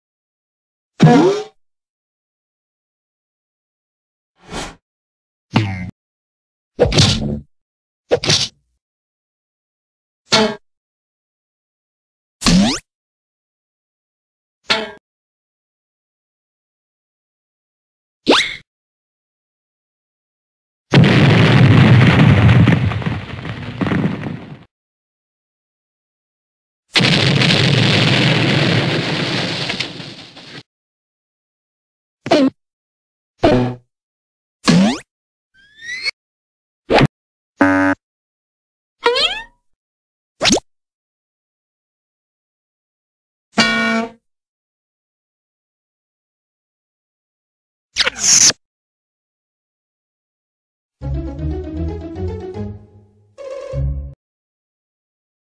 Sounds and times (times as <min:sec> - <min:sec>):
Sound effect: 0:01.0 - 0:01.6, 0:04.4 - 0:04.8, 0:06.8 - 0:07.5, 0:08.1 - 0:08.6, 0:12.4 - 0:12.9, 0:18.3 - 0:18.7, 0:33.4 - 0:33.9, 0:34.7 - 0:36.2, 0:36.9 - 0:38.0, 0:40.4 - 0:40.7, 0:48.0 - 0:48.6.